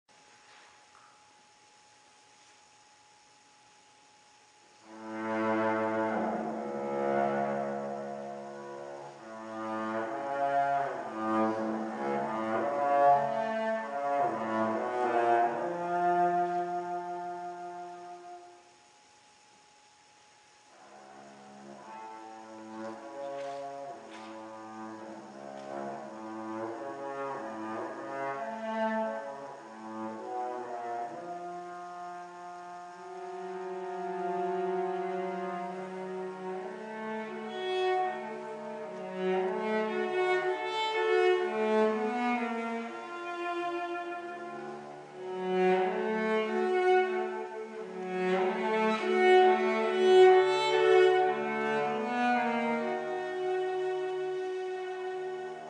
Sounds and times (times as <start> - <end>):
Cello: 0.1 - 55.6
Double bass: 4.4 - 19.4, 20.6 - 55.6.